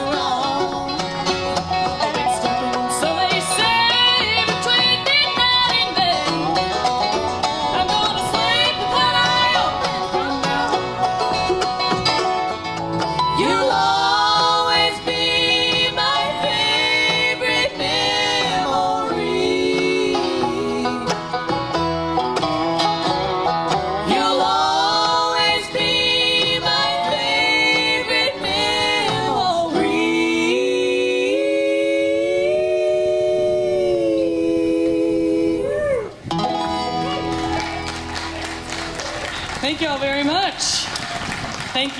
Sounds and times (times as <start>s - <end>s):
Banjo: 0.0s - 35.6s, 36.2s - 41.8s
Bluegrass: 0.0s - 41.9s.